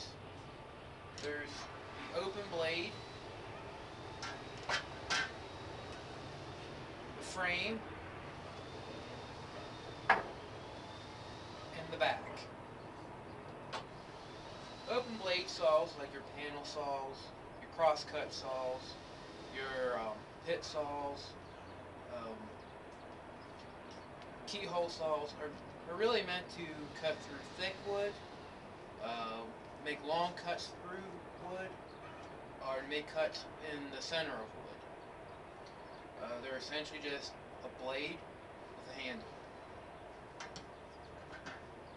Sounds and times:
Speech: 1.2 - 3.0, 7.2 - 7.8, 11.8 - 12.5, 14.9 - 19.0, 19.6 - 21.4, 22.1 - 22.5, 24.5 - 28.2, 29.0 - 31.8, 32.6 - 34.8, 36.2 - 38.2, 38.9 - 39.3.

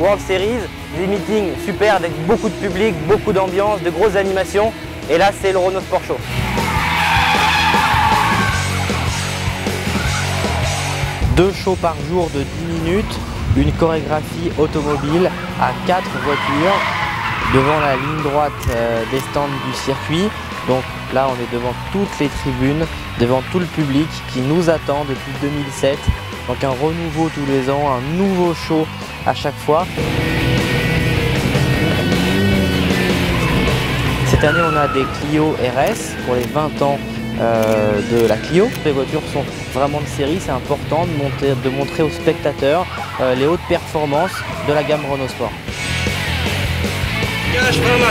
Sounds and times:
Speech: 0.0 - 6.2, 11.3 - 29.9, 34.3 - 45.6, 47.5 - 48.1
Music: 0.0 - 48.1
Skidding: 0.0 - 48.1.

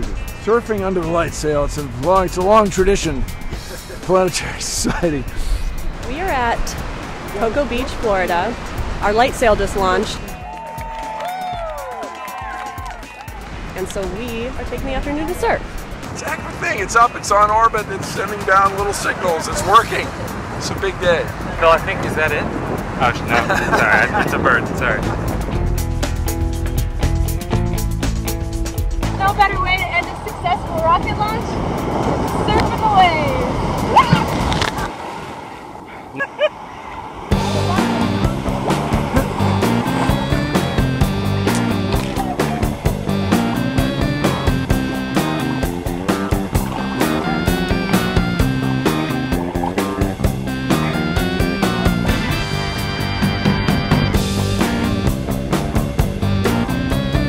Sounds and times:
Music: 0.0 - 33.5, 37.3 - 57.2
Ocean: 0.0 - 57.2
Outside, rural or natural: 0.0 - 57.2.

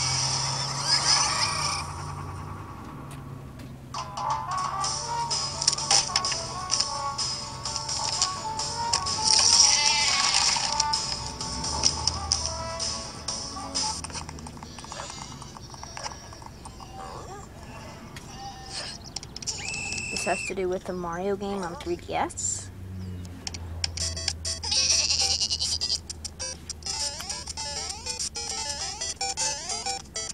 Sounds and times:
Music: 4.0 - 16.3, 24.0 - 25.3, 26.1 - 30.3
Speech: 20.1 - 22.7.

